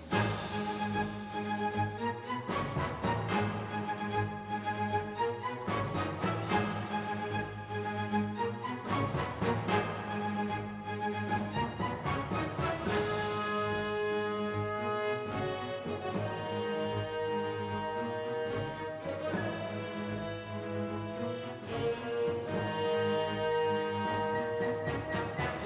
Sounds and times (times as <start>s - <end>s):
Music: 0.0s - 25.6s.